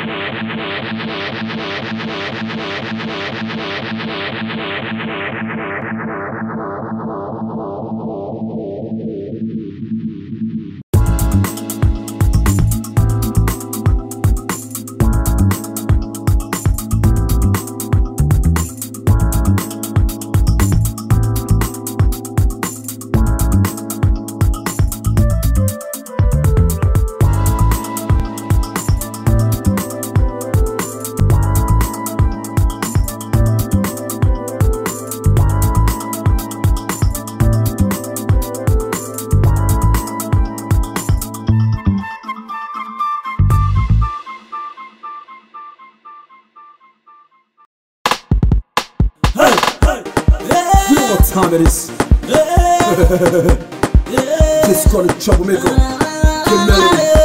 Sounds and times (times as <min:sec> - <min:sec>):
Independent music: 0:11.0 - 0:47.0, 0:48.1 - 0:57.2.